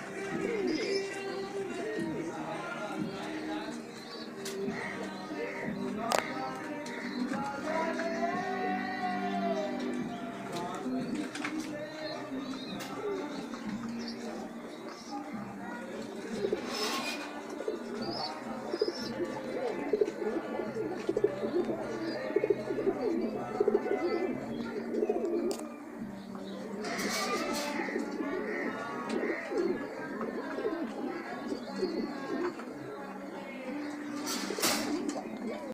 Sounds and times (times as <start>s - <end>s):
Coo: 0.0s - 2.4s, 15.8s - 35.7s
Speech: 0.0s - 35.7s.